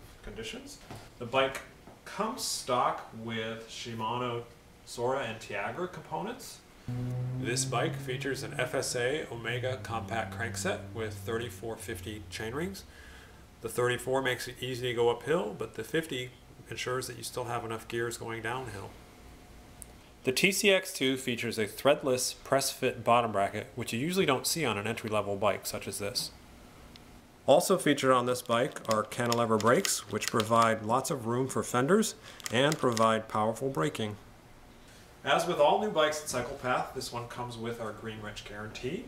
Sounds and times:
Speech: 0.2s - 6.6s, 7.4s - 12.9s, 13.6s - 19.0s, 20.2s - 26.4s, 27.5s - 34.2s, 35.2s - 39.0s.

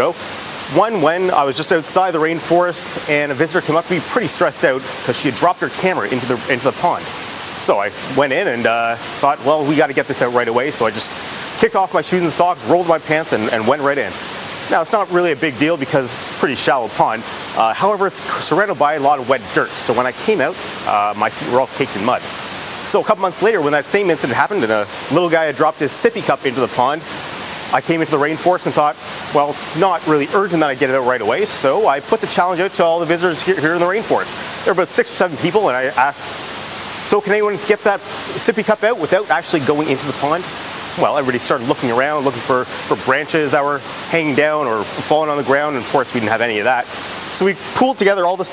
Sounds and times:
Speech: 0.0s - 22.2s, 22.9s - 27.0s, 27.7s - 36.3s, 37.0s - 48.5s
Rain on surface: 0.0s - 48.5s.

